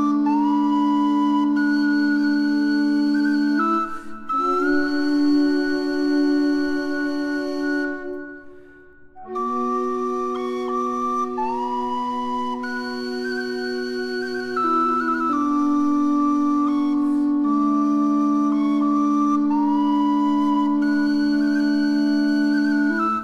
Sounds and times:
Music: 0.0 - 23.2.

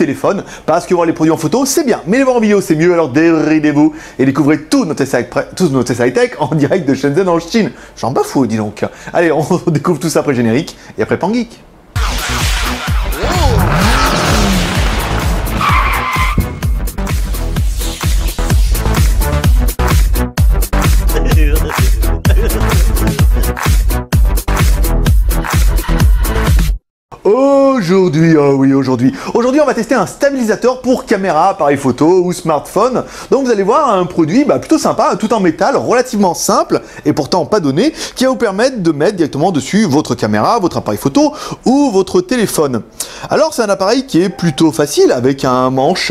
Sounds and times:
Music: 12.0 - 26.8, 44.3 - 44.8.

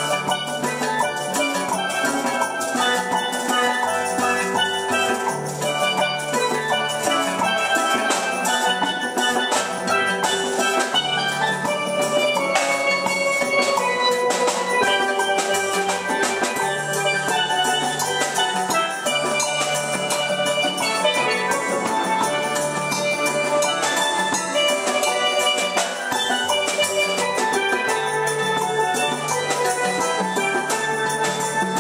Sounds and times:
Drum: 0.0 - 31.8
Drum kit: 0.0 - 31.8
Steelpan: 0.0 - 31.8.

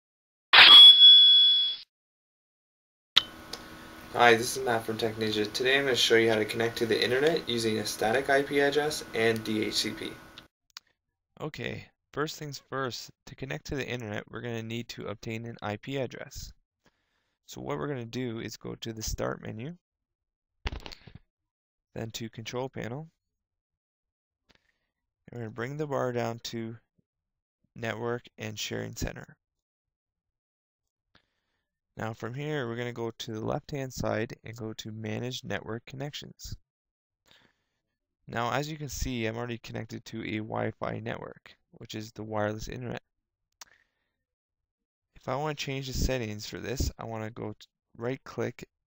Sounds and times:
Speech: 4.1 - 10.2, 11.4 - 16.6, 17.5 - 19.8, 22.0 - 23.2, 25.3 - 26.8, 27.8 - 29.4, 32.0 - 36.6, 38.3 - 43.0, 45.2 - 48.7.

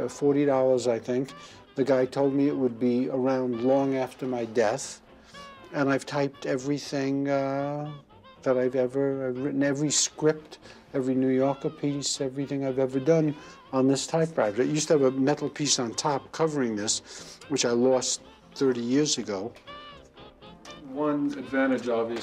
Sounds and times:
Speech: 0.0 - 5.0, 5.7 - 19.6, 20.8 - 22.2.

